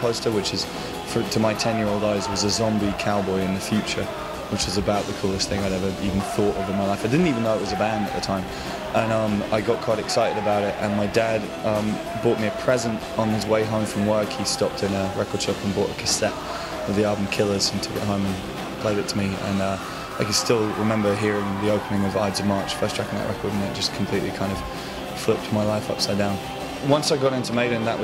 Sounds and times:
Music: 0.0s - 28.0s
Speech: 0.0s - 28.0s.

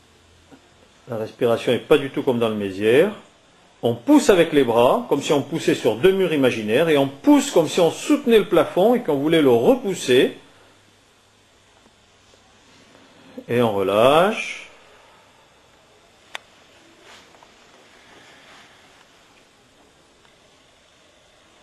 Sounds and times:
Speech: 1.0s - 10.5s, 13.3s - 14.8s.

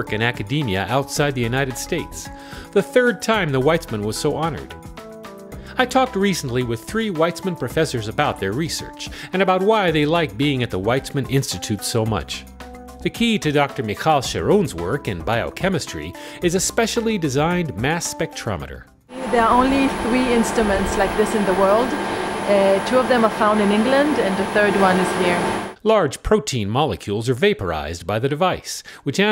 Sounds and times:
Speech: 0.0s - 4.7s, 5.7s - 12.4s, 13.0s - 29.3s
Music: 0.0s - 25.8s.

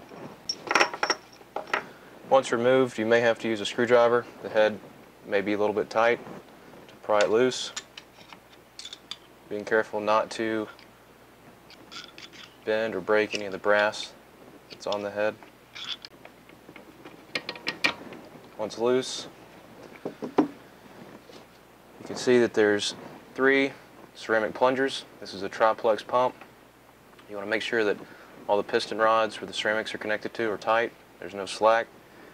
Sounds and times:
Speech: 2.3s - 6.3s, 7.0s - 7.8s, 9.5s - 10.8s, 12.7s - 14.2s, 14.8s - 15.4s, 18.6s - 19.3s, 22.0s - 26.4s, 27.2s - 31.9s.

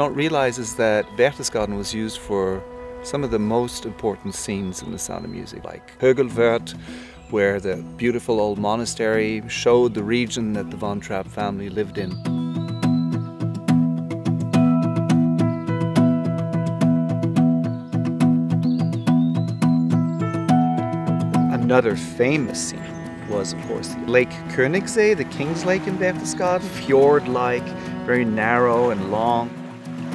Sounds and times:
Speech: 0.0s - 12.2s, 21.5s - 29.5s
Tender music: 0.0s - 30.1s.

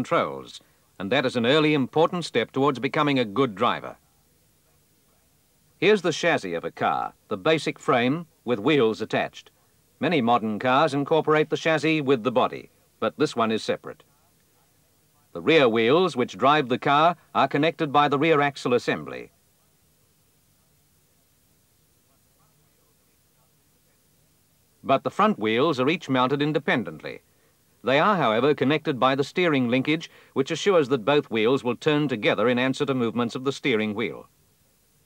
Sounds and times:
Speech: 0.0s - 34.3s.

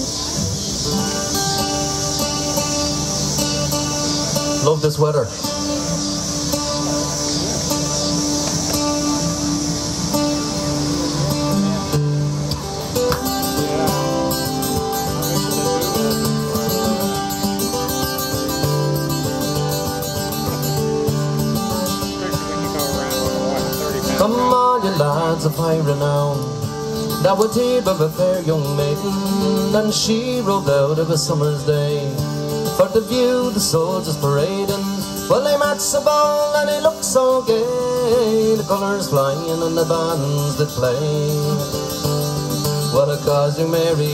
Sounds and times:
Music: 0.0s - 44.1s.

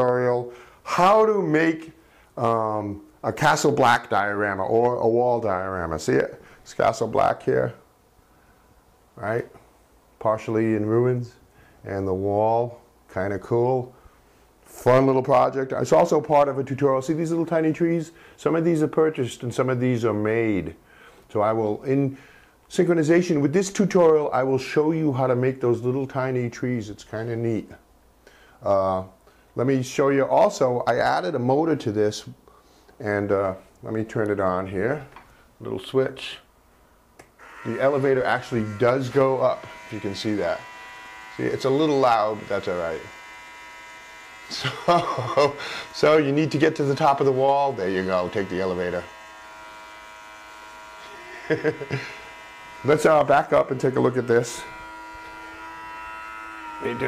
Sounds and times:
Speech: 0.0s - 7.8s, 9.2s - 9.6s, 10.2s - 14.0s, 14.7s - 27.8s, 28.6s - 32.4s, 33.0s - 36.5s, 37.6s - 40.6s, 41.3s - 43.2s, 44.5s - 49.1s, 51.0s - 52.0s, 52.8s - 54.7s, 56.8s - 57.0s
Inside, small room: 0.0s - 57.0s.

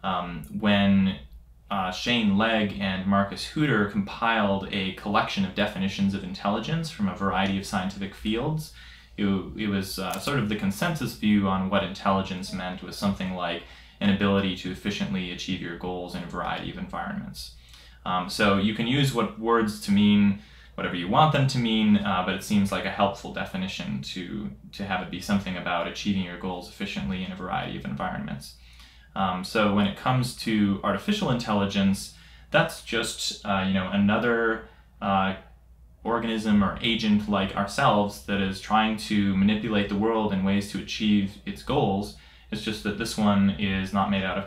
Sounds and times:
Speech: 0.0s - 44.4s.

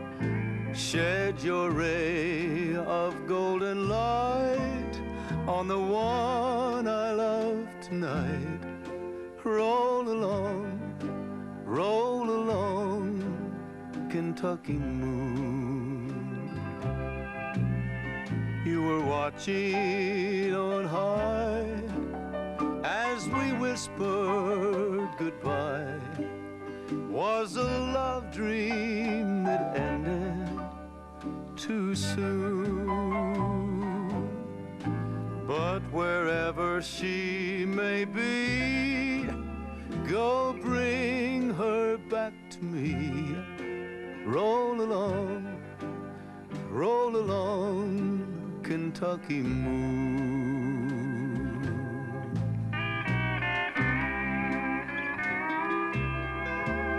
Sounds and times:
Music: 0.0s - 56.9s
Male singing: 0.8s - 8.6s, 9.4s - 10.9s, 11.7s - 13.5s, 14.1s - 16.6s, 18.6s - 22.0s, 22.8s - 26.2s, 27.1s - 30.7s, 31.6s - 34.3s, 35.5s - 39.4s, 40.0s - 43.5s, 44.2s - 45.6s, 46.7s - 52.4s.

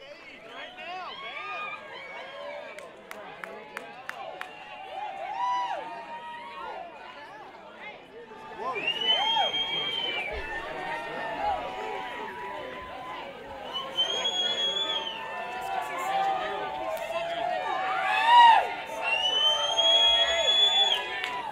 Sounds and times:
Speech: 0.0s - 21.5s.

